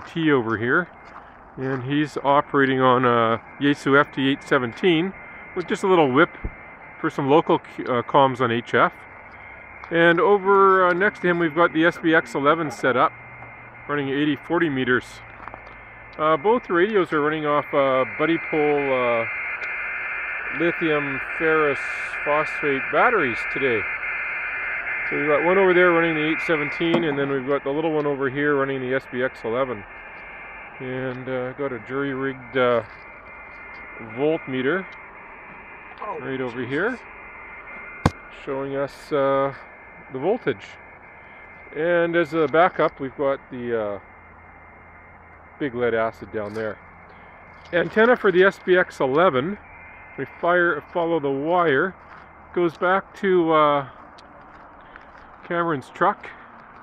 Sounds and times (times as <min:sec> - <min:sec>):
Speech: 0:00.0 - 0:00.9, 0:01.6 - 0:06.4, 0:07.0 - 0:09.0, 0:09.9 - 0:13.1, 0:13.9 - 0:15.2, 0:16.2 - 0:19.3, 0:20.5 - 0:23.9, 0:25.1 - 0:29.9, 0:30.8 - 0:32.9, 0:34.0 - 0:34.9, 0:36.0 - 0:37.0, 0:38.4 - 0:40.8, 0:41.7 - 0:44.0, 0:45.6 - 0:46.8, 0:47.7 - 0:49.6, 0:50.2 - 0:53.9, 0:55.4 - 0:56.4.